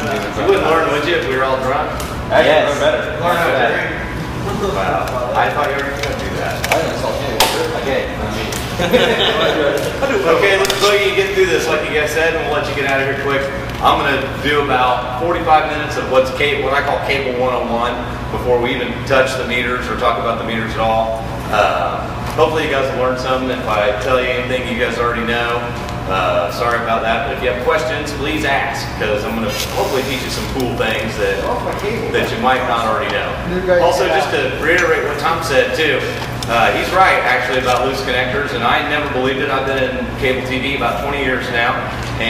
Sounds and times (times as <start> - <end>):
Speech: 0.0 - 8.6, 9.2 - 42.2.